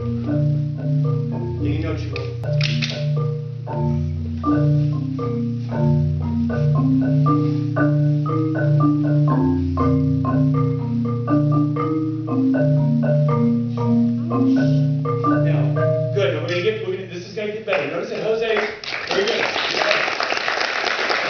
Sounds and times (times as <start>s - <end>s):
Percussion: 0.0s - 21.2s
Speech: 15.4s - 20.0s.